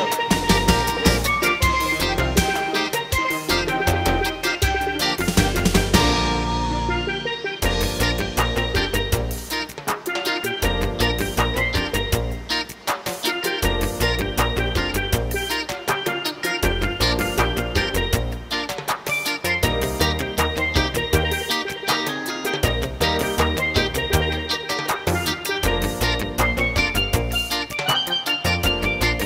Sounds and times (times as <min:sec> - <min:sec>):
Music: 0:00.0 - 0:29.2.